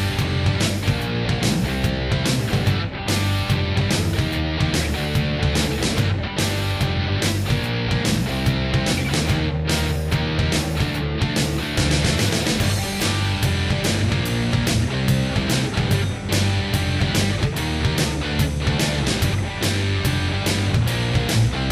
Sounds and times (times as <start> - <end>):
Soundtrack music: 0.0 - 21.7.